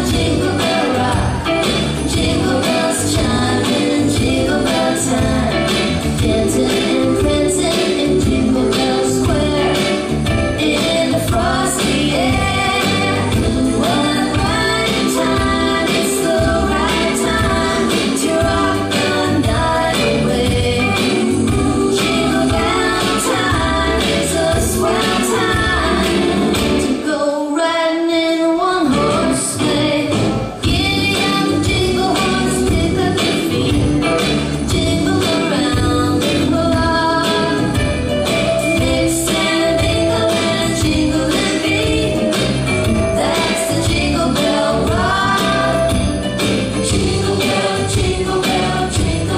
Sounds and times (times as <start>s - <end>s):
Music: 0.0s - 49.3s.